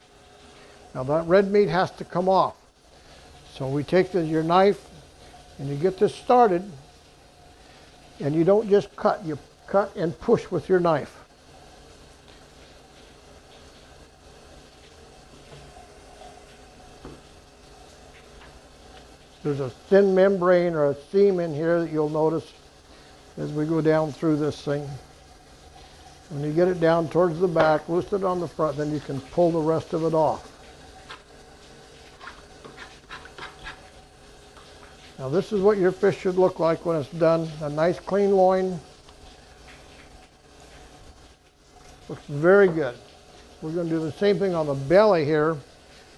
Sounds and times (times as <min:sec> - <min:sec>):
Speech: 0:01.0 - 0:02.6, 0:03.5 - 0:04.9, 0:05.6 - 0:06.8, 0:08.2 - 0:11.2, 0:19.4 - 0:22.6, 0:23.4 - 0:25.0, 0:26.3 - 0:30.5, 0:35.2 - 0:38.8, 0:42.1 - 0:43.0, 0:43.6 - 0:45.6.